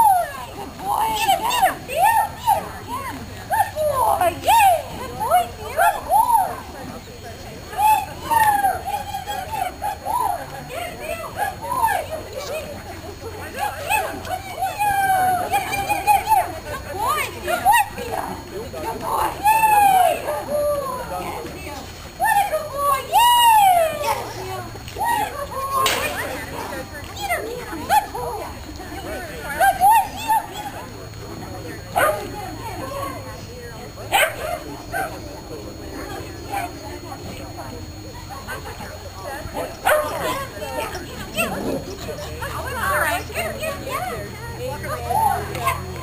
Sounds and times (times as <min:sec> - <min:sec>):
Speech: 0:00.0 - 0:46.0.